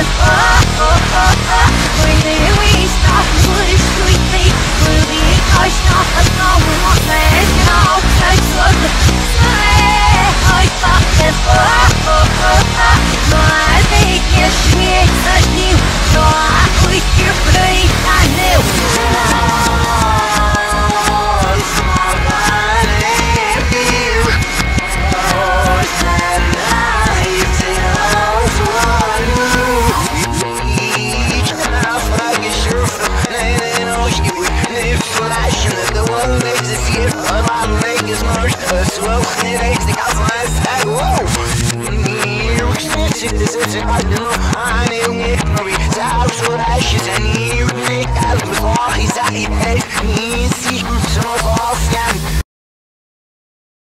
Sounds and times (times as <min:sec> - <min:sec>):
Soundtrack music: 0:00.0 - 0:52.4.